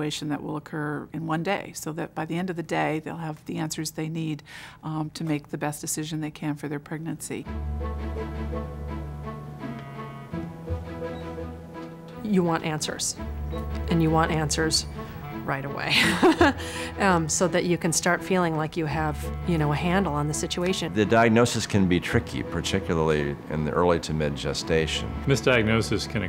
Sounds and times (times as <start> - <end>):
Music: 7.4 - 26.2
Speech: 17.0 - 26.2.